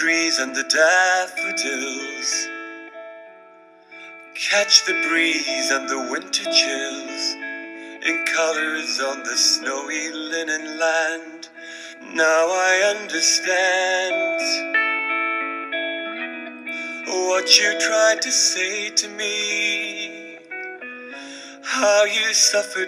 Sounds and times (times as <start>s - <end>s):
Male singing: 0.0s - 2.5s, 4.4s - 7.4s, 8.0s - 14.7s, 16.9s - 20.4s, 21.5s - 22.8s
Music: 0.0s - 22.8s.